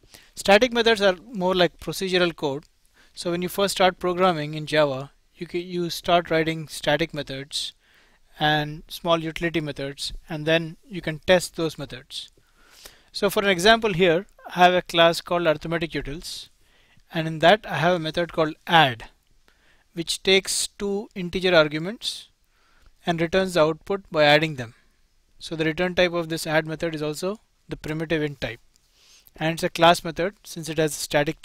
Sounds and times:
Speech: 0.4 - 7.8, 8.4 - 12.3, 13.2 - 16.5, 17.1 - 19.2, 20.0 - 22.3, 23.0 - 24.8, 25.4 - 28.6, 29.4 - 31.4.

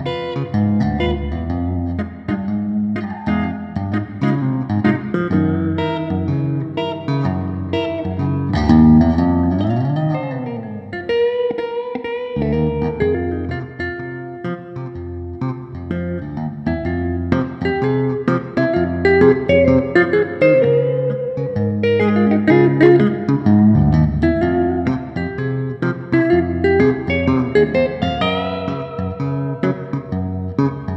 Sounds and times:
Bass guitar: 0.0 - 30.9.

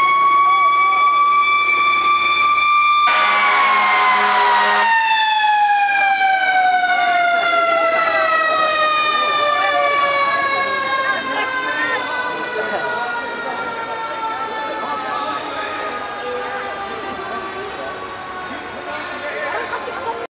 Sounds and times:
Fire engine, fire truck (siren): 0.0 - 20.3
Speech: 7.4 - 20.3.

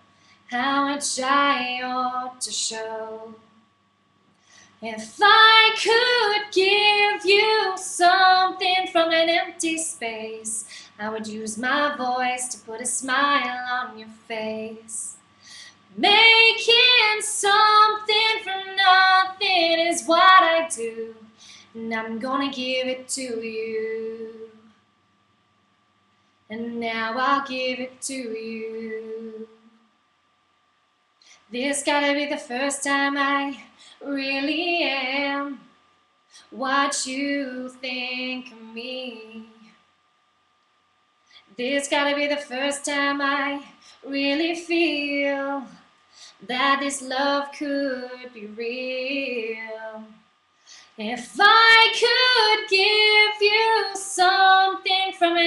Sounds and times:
Female singing: 0.5 - 3.4, 4.8 - 15.2, 16.0 - 24.7, 26.5 - 29.7, 31.5 - 35.7, 36.6 - 39.7, 41.6 - 45.8, 46.4 - 50.2, 51.0 - 55.4.

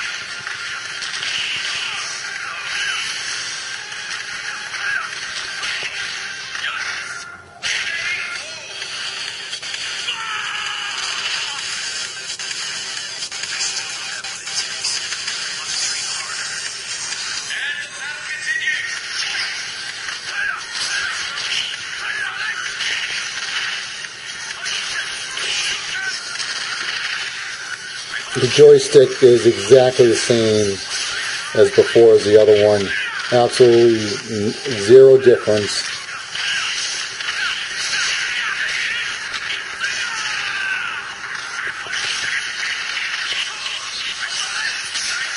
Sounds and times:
Speech: 28.2 - 36.2.

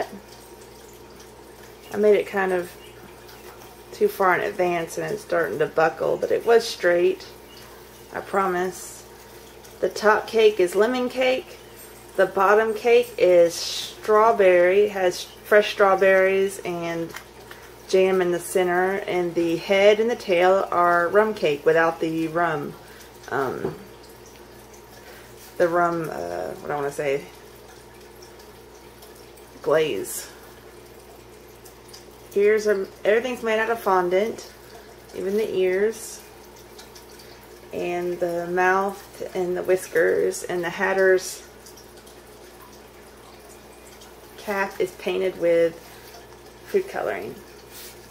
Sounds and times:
Speech: 1.9 - 2.8, 4.0 - 7.3, 8.1 - 9.1, 9.8 - 11.6, 12.2 - 17.2, 17.9 - 23.8, 25.6 - 27.3, 29.6 - 30.4, 32.4 - 34.5, 35.2 - 36.2, 37.8 - 41.5, 44.4 - 45.8, 46.7 - 47.4.

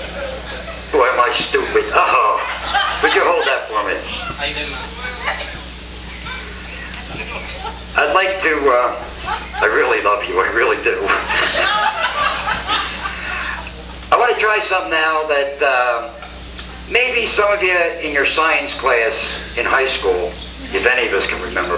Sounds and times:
Speech: 1.0 - 2.4, 14.1 - 16.2, 16.9 - 21.7.

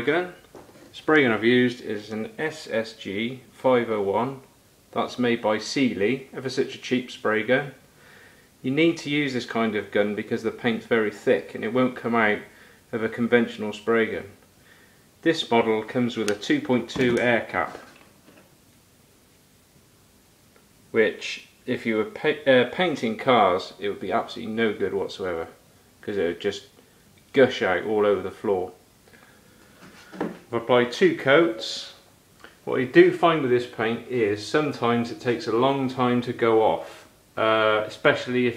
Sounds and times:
Speech: 0.0 - 7.8, 8.6 - 14.4, 15.2 - 18.0, 20.9 - 28.8, 30.5 - 38.5.

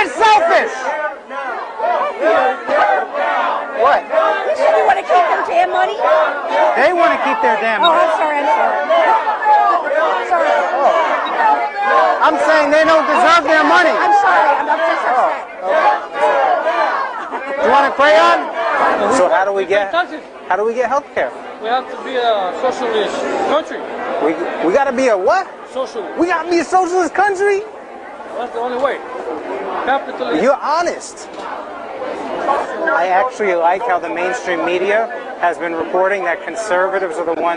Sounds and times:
Inside, public space: 0.0 - 37.5.

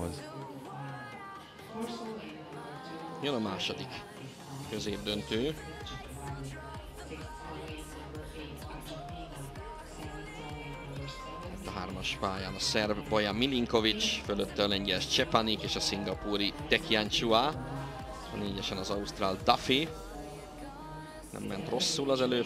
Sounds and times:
Speech: 0.0 - 0.4, 1.7 - 6.6, 7.3 - 20.0, 21.3 - 22.4
Music: 0.0 - 22.4.

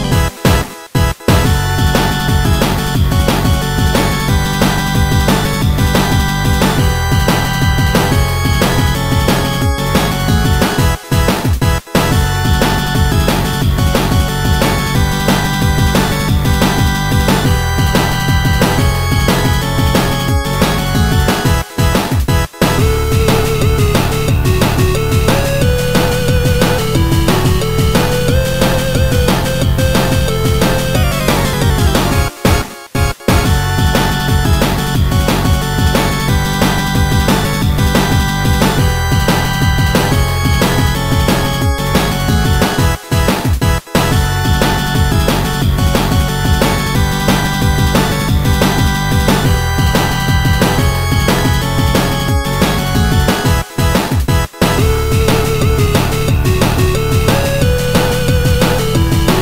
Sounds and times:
Music: 0.0 - 59.4.

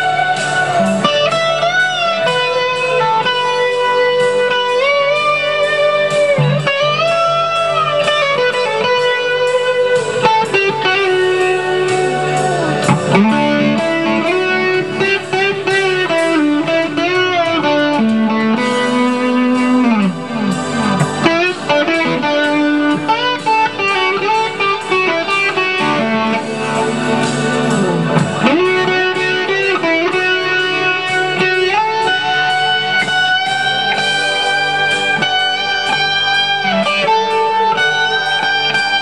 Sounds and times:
Guitar: 0.0 - 39.0
Progressive rock: 0.0 - 39.0.

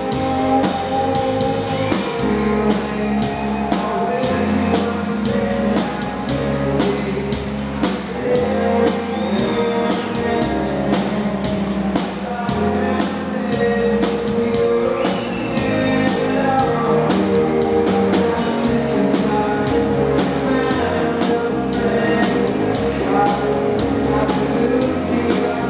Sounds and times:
Music: 0.0 - 25.6.

